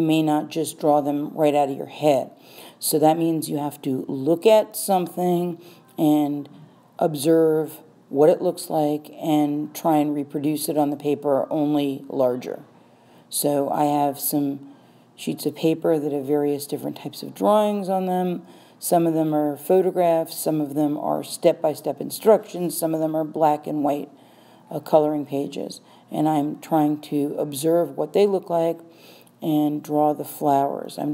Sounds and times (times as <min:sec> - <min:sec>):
Speech: 0:00.0 - 0:12.7, 0:13.3 - 0:14.6, 0:15.2 - 0:24.1, 0:24.7 - 0:28.8, 0:29.4 - 0:31.1.